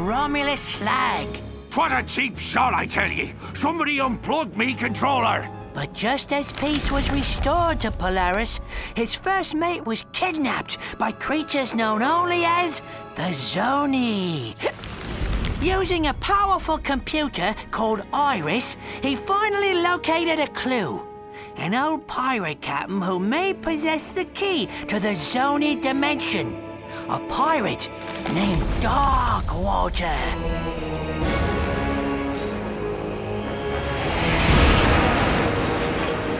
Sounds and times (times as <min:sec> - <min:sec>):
Speech: 0:00.0 - 0:14.8, 0:15.6 - 0:21.0, 0:21.6 - 0:30.4
Music: 0:00.0 - 0:36.3.